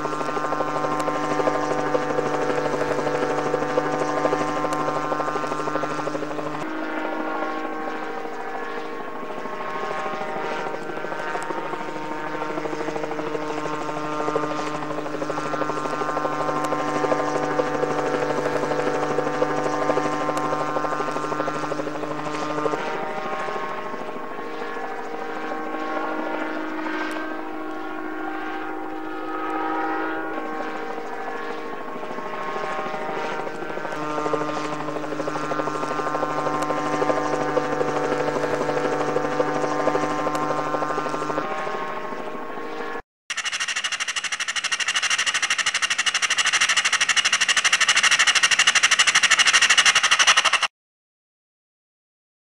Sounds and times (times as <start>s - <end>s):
Helicopter: 0.0s - 50.7s.